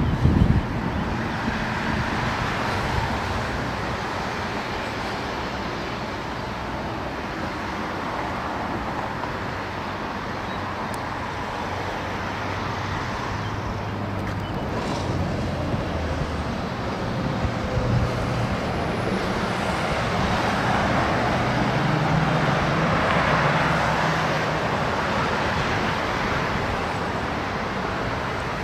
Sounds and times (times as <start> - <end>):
Outside, urban or manmade: 0.0 - 28.6
Vehicle: 0.0 - 28.6.